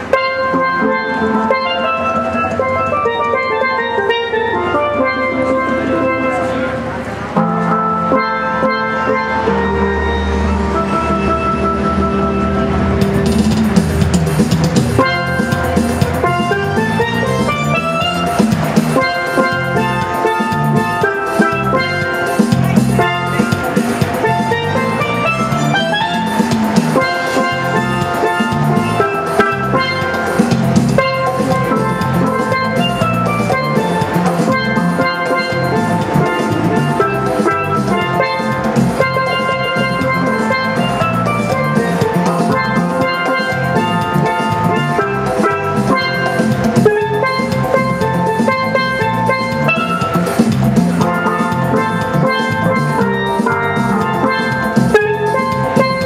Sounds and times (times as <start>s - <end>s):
Drum: 7.4s - 56.0s.